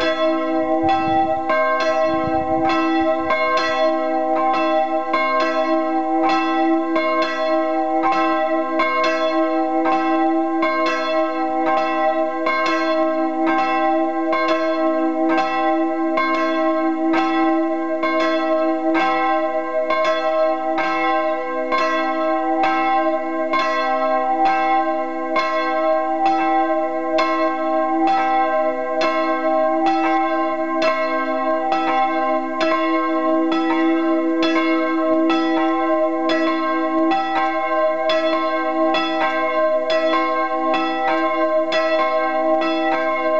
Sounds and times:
Church bell: 0.0 - 43.3.

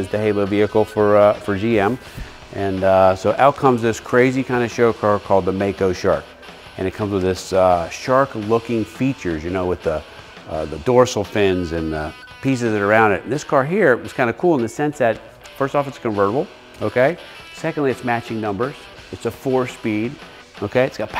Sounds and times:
Music: 0.0 - 21.1
Speech: 0.0 - 21.1.

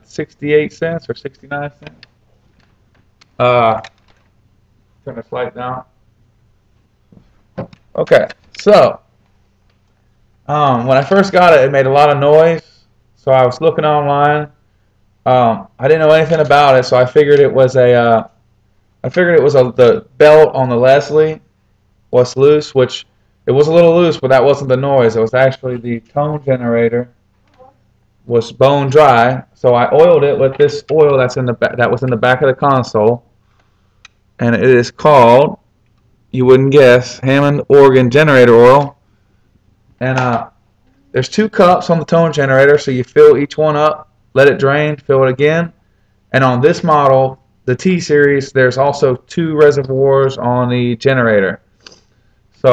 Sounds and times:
Speech: 0.0 - 2.0, 3.4 - 3.9, 5.1 - 5.9, 8.0 - 9.0, 10.5 - 14.6, 15.3 - 18.4, 19.1 - 21.4, 22.2 - 27.7, 28.3 - 33.3, 34.4 - 35.6, 36.4 - 39.0, 40.0 - 45.8, 46.4 - 51.6.

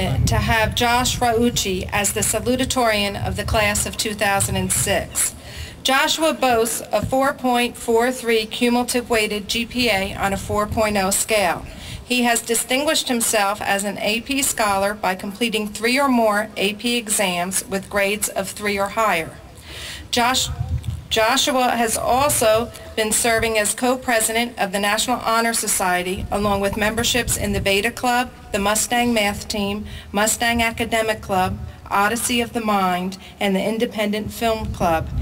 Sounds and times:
Female speech, woman speaking: 0.0 - 19.4, 20.1 - 35.1
Narration, monologue: 0.0 - 35.2.

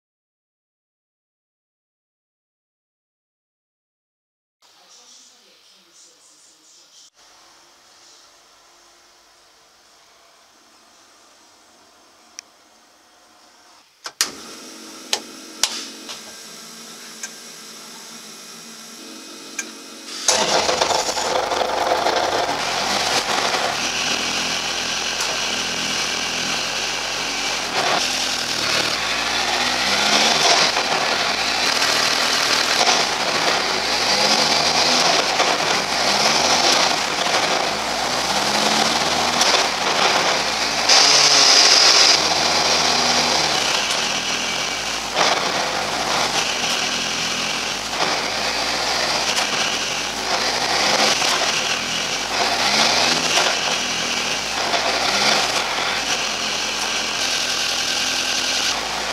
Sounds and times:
Car: 20.3 - 59.1.

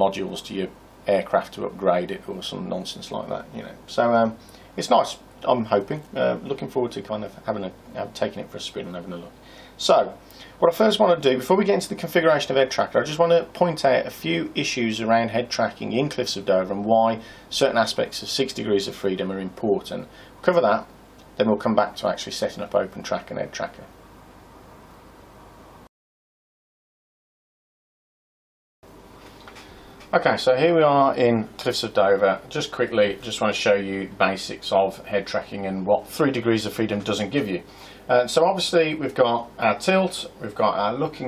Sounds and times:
Speech: 0.0 - 24.0, 30.1 - 41.2
Inside, small room: 0.0 - 25.9, 28.9 - 41.2.

